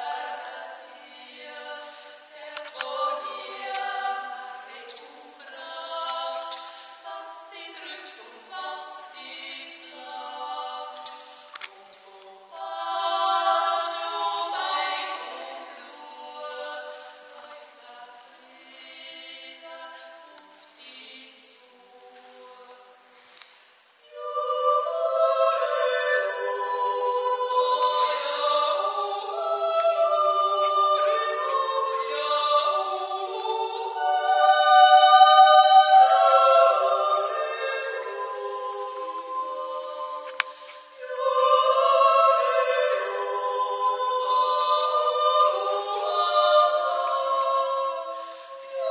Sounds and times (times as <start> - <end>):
Chant: 0.0 - 48.9.